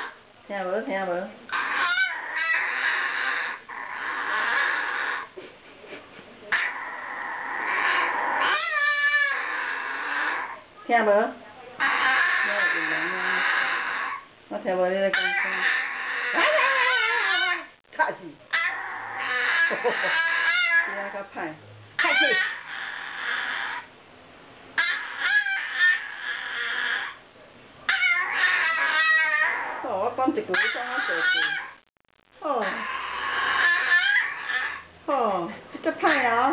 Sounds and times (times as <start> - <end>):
Speech: 0.5 - 1.4, 10.8 - 13.4, 14.5 - 15.7, 18.0 - 18.5, 20.9 - 22.4, 29.8 - 31.6, 32.4 - 32.8, 35.1 - 36.5
Whimper (dog): 1.5 - 5.3, 6.6 - 10.6, 11.8 - 14.2, 15.2 - 17.7, 18.5 - 21.0, 22.0 - 23.9, 24.8 - 27.2, 27.9 - 29.9, 30.6 - 31.8, 32.6 - 34.9
Yip: 1.5 - 5.3, 7.6 - 10.6, 15.1 - 17.7, 18.5 - 21.0, 22.0 - 23.9, 24.8 - 27.2, 27.9 - 29.8, 30.6 - 31.8, 32.6 - 34.9.